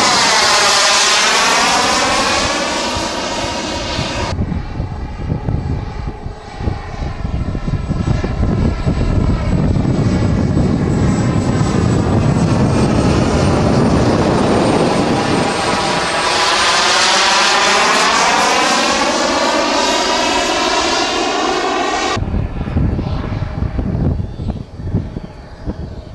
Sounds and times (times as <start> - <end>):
Propeller, airscrew: 0.0 - 26.1.